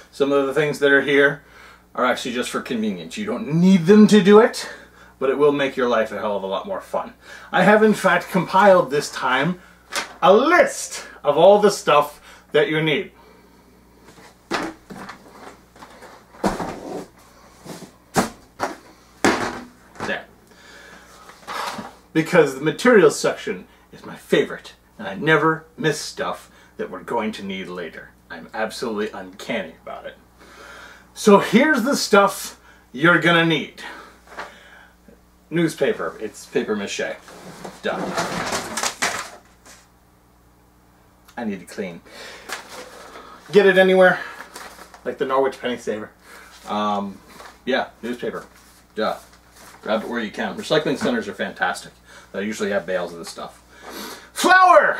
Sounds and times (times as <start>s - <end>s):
Speech: 0.0s - 9.6s, 10.2s - 13.2s, 20.0s - 20.3s, 22.1s - 30.2s, 31.2s - 34.1s, 35.5s - 38.5s, 41.3s - 42.0s, 43.5s - 44.3s, 45.0s - 53.6s, 54.4s - 54.9s.